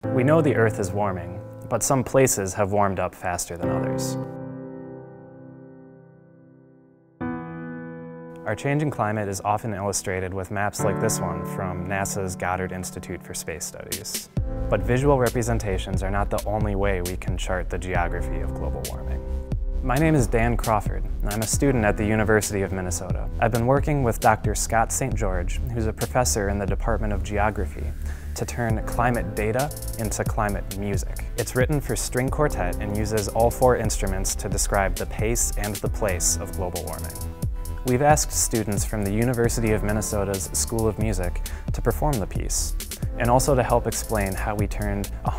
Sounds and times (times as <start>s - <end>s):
Music: 0.0s - 45.3s
Speech: 0.2s - 4.2s, 8.4s - 19.2s, 19.8s - 37.2s, 37.8s - 45.3s.